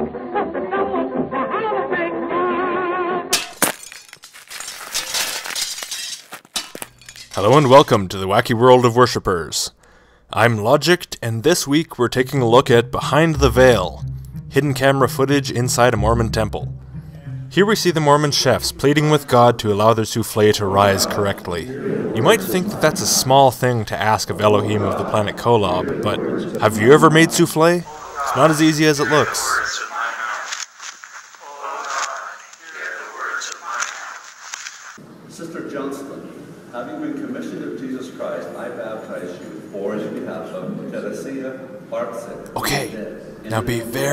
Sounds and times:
Music: 0:00.0 - 0:03.3, 0:12.6 - 0:20.0
Breaking: 0:03.3 - 0:07.8
Speech: 0:07.4 - 0:16.7, 0:17.5 - 0:30.6, 0:31.4 - 0:34.2, 0:35.3 - 0:44.1.

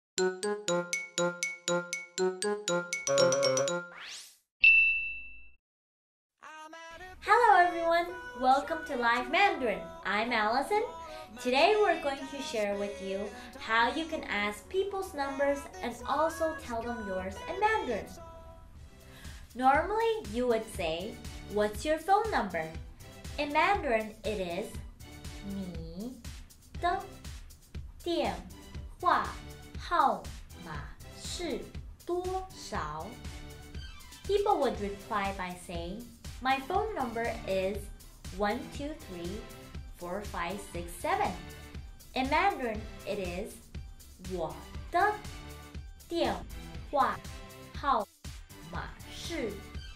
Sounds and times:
Music: 0:00.2 - 0:04.1, 0:06.4 - 0:49.9
Speech: 0:07.2 - 0:18.2, 0:19.6 - 0:22.8, 0:23.4 - 0:24.8, 0:25.5 - 0:26.2, 0:26.8 - 0:27.1, 0:28.0 - 0:33.2, 0:34.3 - 0:41.4, 0:42.2 - 0:43.6, 0:44.2 - 0:45.2, 0:46.1 - 0:47.2, 0:47.8 - 0:49.6.

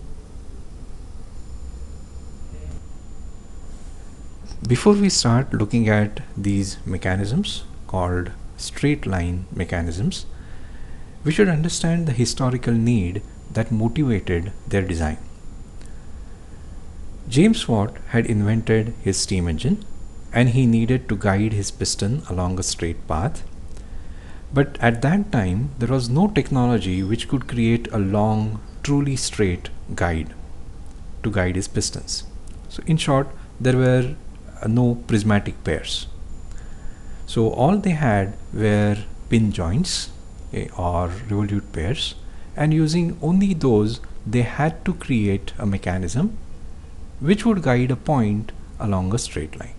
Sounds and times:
Speech: 0:04.5 - 0:10.4, 0:11.2 - 0:15.3, 0:17.3 - 0:23.5, 0:24.5 - 0:30.4, 0:31.2 - 0:36.2, 0:37.3 - 0:46.4, 0:47.2 - 0:49.7.

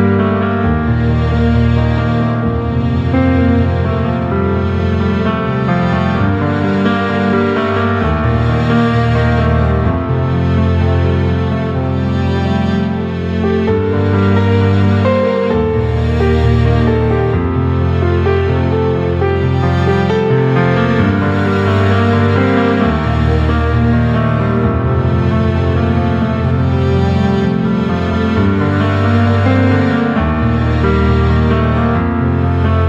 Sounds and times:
Music: 0:00.0 - 0:32.8.

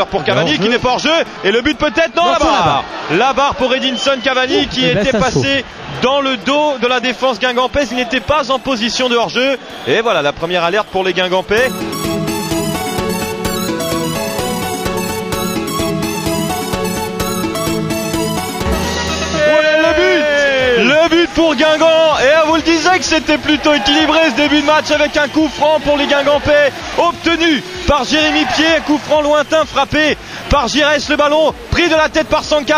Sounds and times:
Speech: 0:00.0 - 0:11.7, 0:19.4 - 0:32.7.

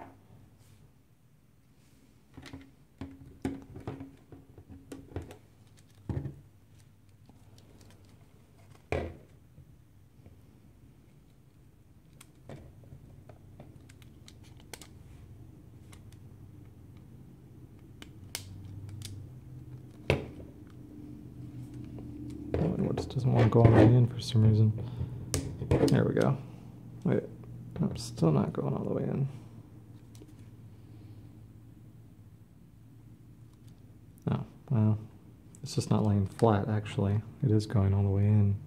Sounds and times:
Inside, small room: 0:00.0 - 0:38.6.

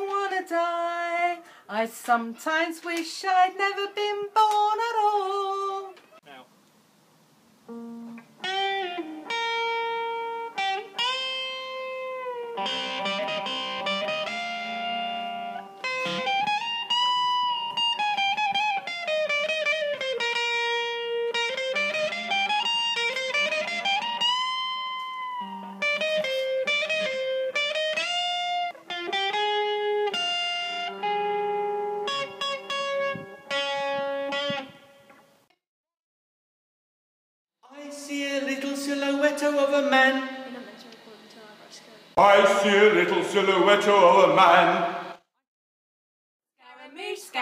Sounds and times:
Tapping (guitar technique): 0:07.7 - 0:35.2.

